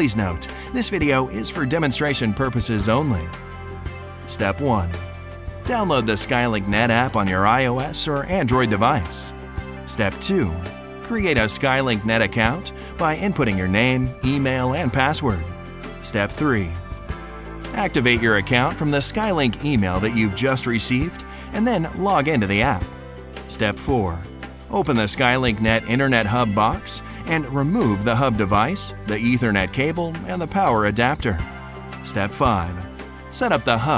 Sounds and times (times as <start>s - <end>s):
Speech: 0.0s - 3.3s, 4.3s - 5.0s, 5.7s - 9.3s, 9.9s - 15.4s, 16.0s - 16.8s, 17.8s - 22.9s, 23.5s - 31.4s, 32.0s - 32.8s, 33.4s - 33.9s
Music: 0.0s - 33.9s.